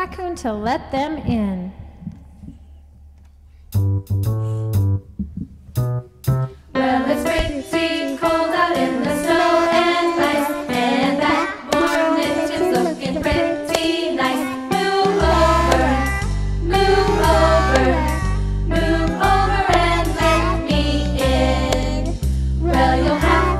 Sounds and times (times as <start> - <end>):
Choir: 6.7 - 23.5.